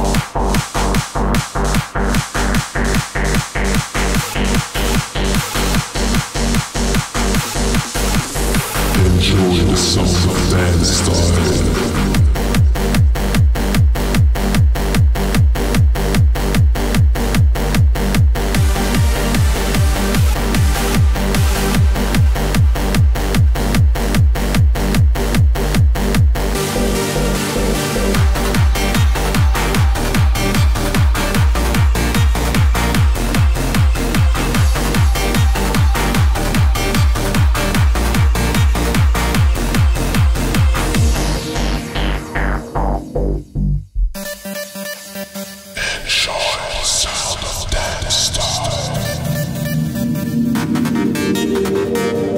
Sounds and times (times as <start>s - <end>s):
Dance music: 0.0s - 15.8s, 16.5s - 23.4s, 26.4s - 52.3s.